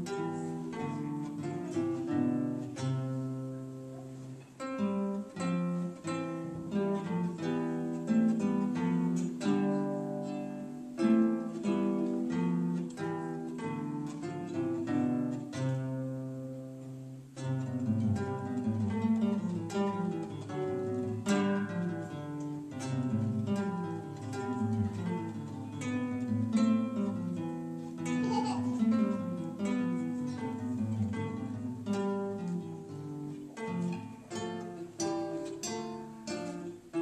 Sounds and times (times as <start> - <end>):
Acoustic guitar: 0.0 - 37.0.